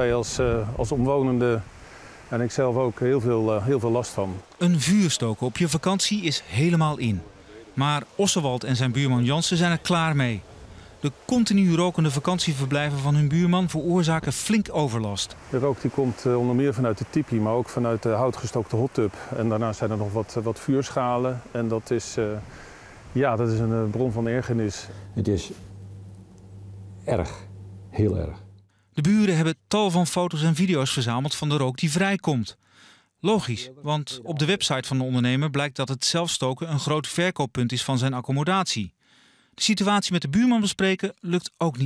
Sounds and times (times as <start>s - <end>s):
Speech: 0.0s - 1.7s, 2.3s - 10.4s, 11.0s - 22.4s, 23.2s - 25.6s, 27.1s - 28.4s, 29.0s - 32.6s, 33.2s - 38.9s, 39.6s - 41.8s.